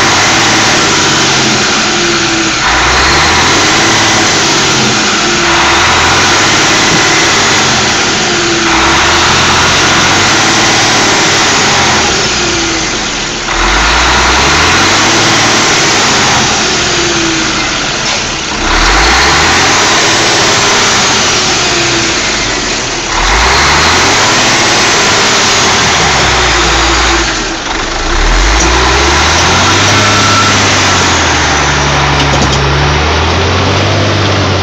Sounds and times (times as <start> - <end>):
Truck: 0.0 - 34.6.